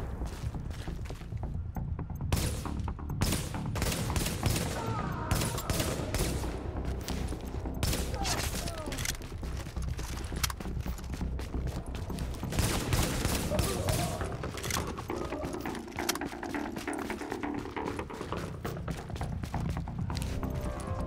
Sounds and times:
Music: 0.0 - 21.0
Outside, urban or manmade: 0.0 - 21.0.

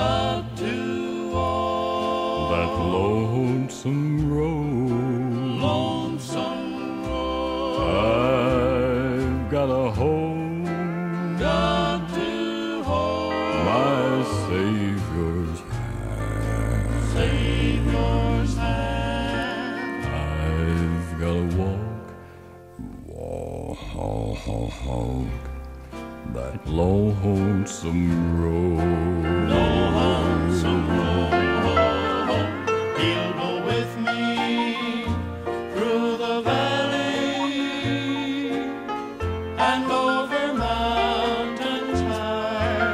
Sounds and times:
Music: 0.0 - 42.9.

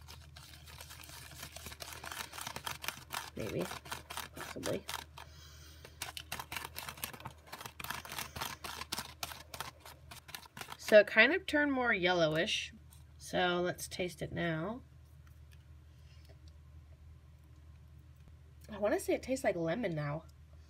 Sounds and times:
Inside, small room: 0.0 - 20.7
Speech: 10.9 - 14.8, 18.7 - 20.3.

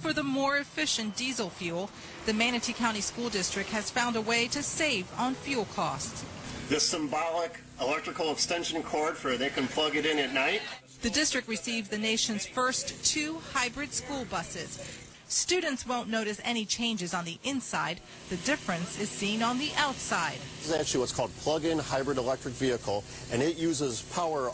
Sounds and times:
Speech: 6.7 - 24.5.

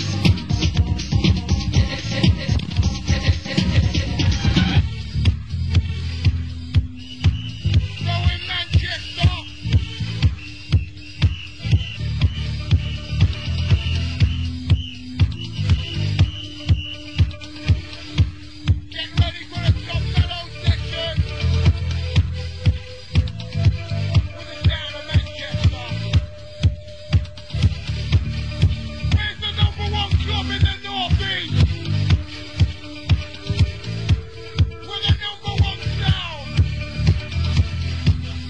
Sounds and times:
Music: 0.0 - 38.4
Speech: 8.0 - 9.5, 19.0 - 21.2, 24.4 - 26.1, 29.2 - 31.6, 34.9 - 36.6.

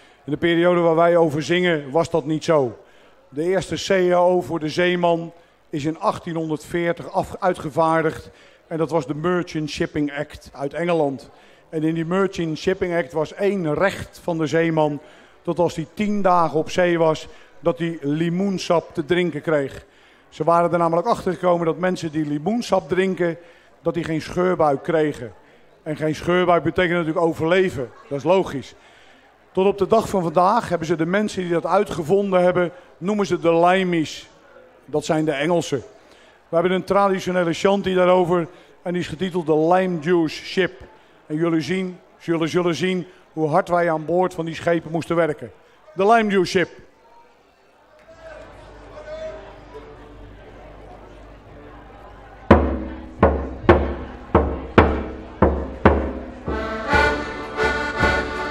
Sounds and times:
Speech: 0.3 - 28.8, 29.5 - 49.8.

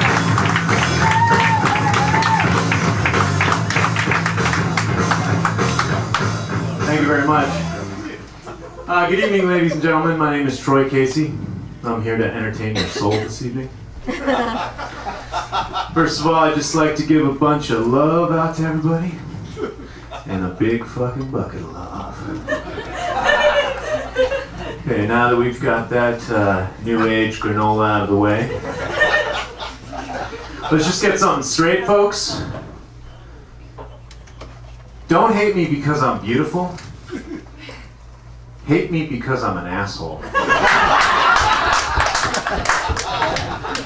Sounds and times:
Speech: 8.9 - 13.7, 16.0 - 19.2, 20.3 - 22.4, 24.8 - 28.6, 30.7 - 32.6, 35.1 - 36.8, 38.6 - 40.2
Snicker: 14.1 - 16.0, 22.2 - 24.8, 28.5 - 30.8, 37.0 - 37.9, 40.2 - 43.8.

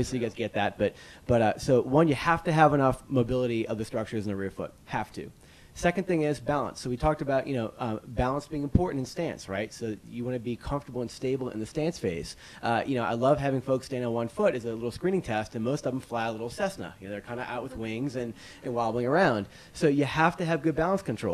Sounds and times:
Speech: 0.0 - 21.3.

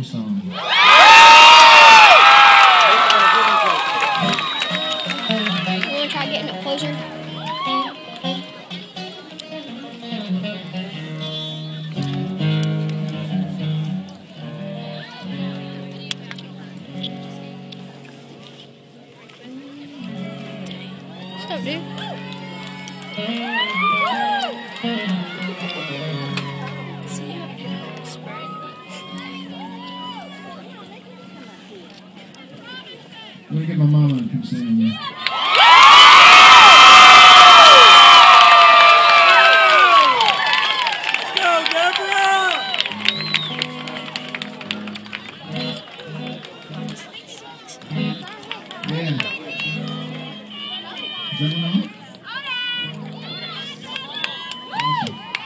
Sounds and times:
Music: 4.0 - 32.7, 42.5 - 55.4.

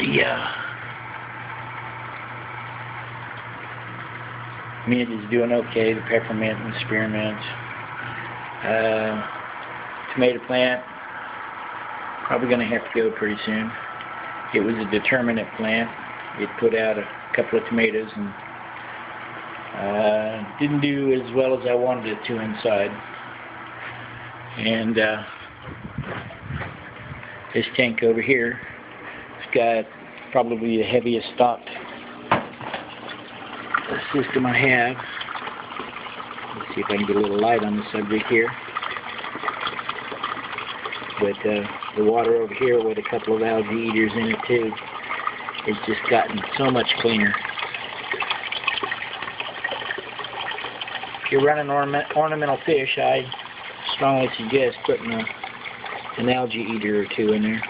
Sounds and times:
Speech: 0.0 - 0.6, 4.9 - 7.6, 8.6 - 9.3, 10.1 - 10.9, 12.3 - 13.8, 14.6 - 18.4, 19.8 - 23.0, 24.6 - 25.3, 27.6 - 28.7, 29.4 - 31.8, 33.9 - 35.0, 36.6 - 38.6, 41.2 - 44.8, 45.6 - 47.4, 51.3 - 55.3, 56.2 - 57.6
Liquid: 0.0 - 57.6.

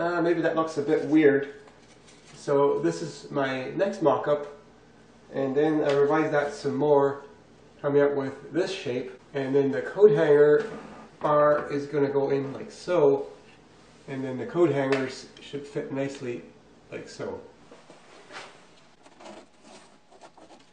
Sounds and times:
Speech: 0.0 - 1.6, 2.4 - 4.6, 5.3 - 13.4, 14.1 - 17.5.

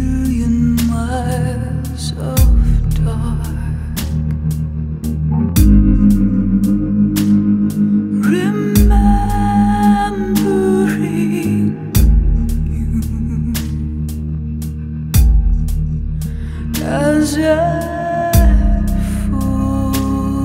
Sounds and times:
Music: 0.0 - 20.4.

